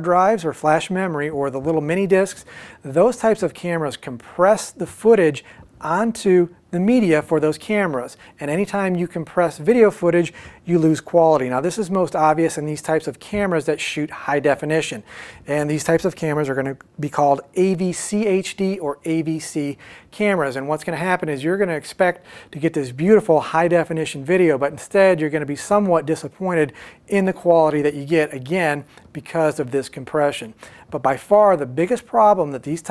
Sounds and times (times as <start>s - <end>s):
Speech: 0.0s - 32.9s.